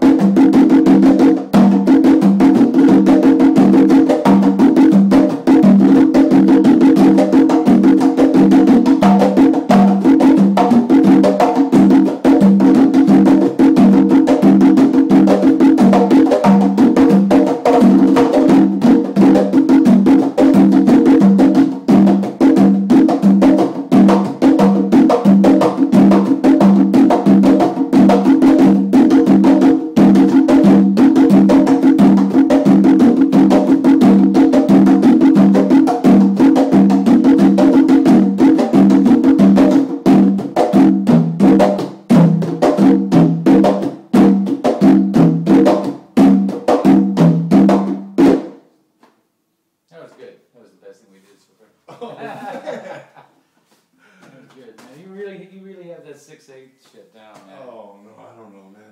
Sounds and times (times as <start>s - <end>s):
Drum roll: 0.0s - 48.6s.